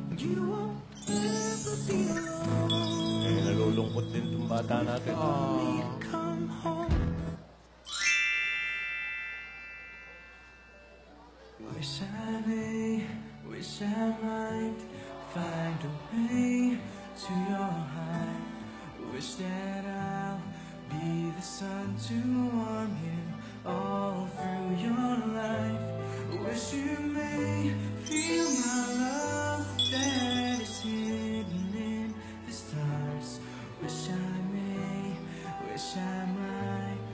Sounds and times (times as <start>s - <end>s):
Music: 0.0s - 8.3s, 10.5s - 37.1s.